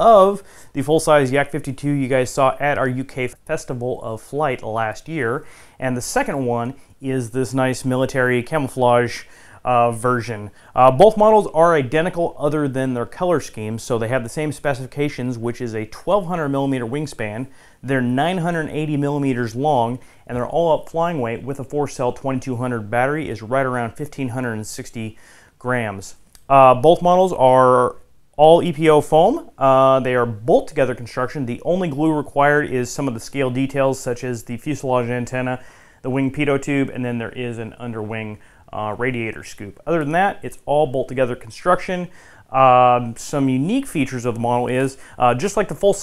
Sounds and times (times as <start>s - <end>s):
Speech: 0.0s - 46.0s.